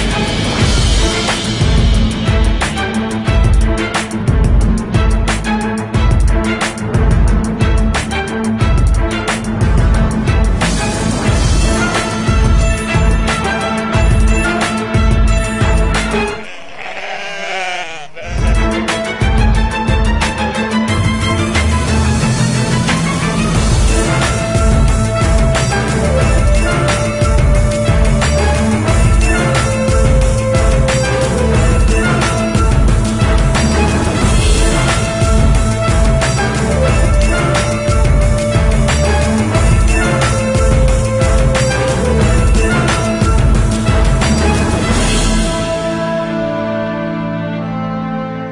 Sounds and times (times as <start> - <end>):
Music: 0.0 - 17.6, 18.2 - 48.5.